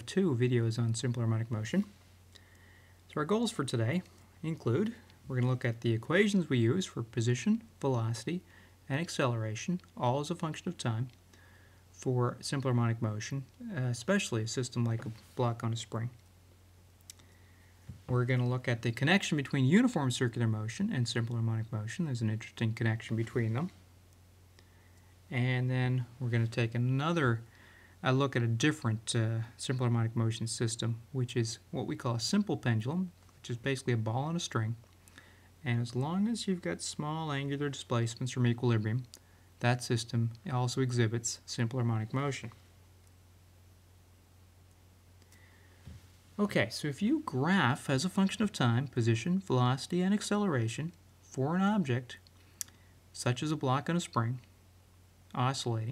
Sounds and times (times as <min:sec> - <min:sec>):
Speech: 0:00.0 - 0:02.0, 0:03.1 - 0:11.2, 0:12.0 - 0:16.2, 0:18.1 - 0:23.8, 0:25.3 - 0:34.8, 0:35.6 - 0:42.6, 0:46.4 - 0:52.3, 0:53.2 - 0:54.5, 0:55.3 - 0:55.9.